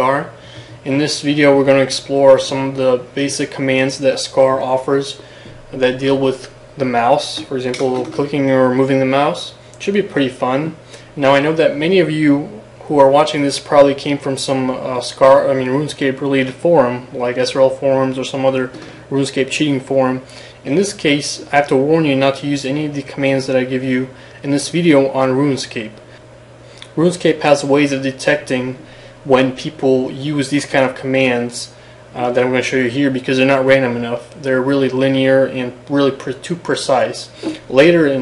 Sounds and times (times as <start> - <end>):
Speech: 0.0 - 26.0, 26.8 - 38.2.